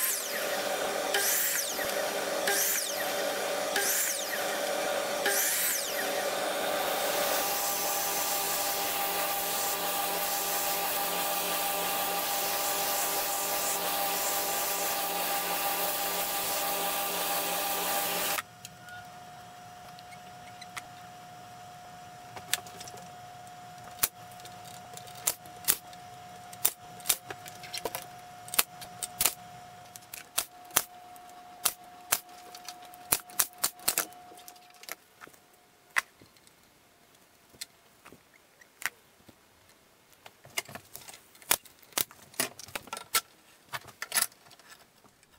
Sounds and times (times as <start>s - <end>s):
Sanding: 0.0s - 18.4s.